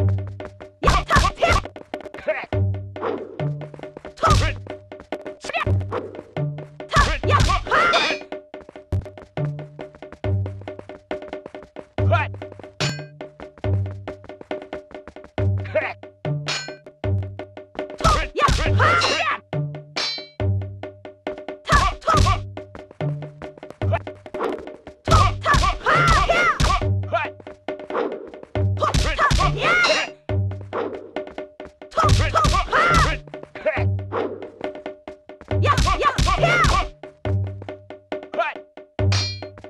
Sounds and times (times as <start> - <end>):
Music: 0.0 - 39.6
Speech: 0.8 - 1.6, 2.2 - 2.5, 4.2 - 4.6, 5.4 - 5.7, 6.9 - 8.2, 12.0 - 12.3, 15.6 - 16.0, 18.0 - 19.4, 21.7 - 22.4, 25.1 - 27.3, 28.8 - 30.2, 31.9 - 33.9, 35.6 - 36.9, 38.4 - 38.6.